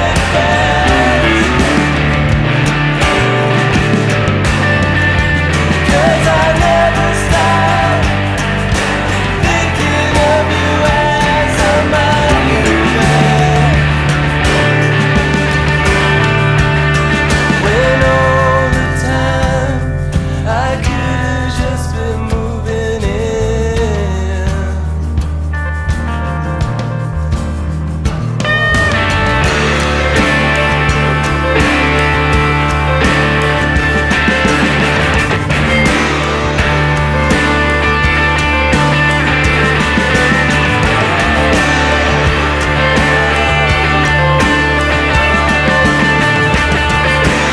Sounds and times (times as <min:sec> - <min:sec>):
Progressive rock: 0:00.0 - 0:47.5.